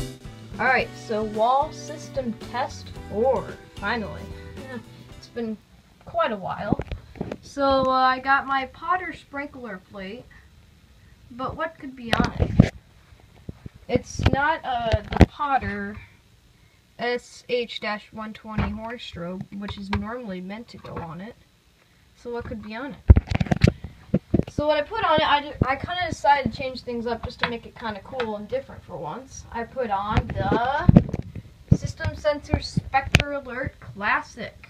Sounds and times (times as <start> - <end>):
Speech: 0.6 - 6.9, 7.5 - 10.4, 11.3 - 12.7, 13.9 - 16.1, 17.0 - 21.4, 22.2 - 23.0, 24.5 - 31.0, 31.7 - 34.7.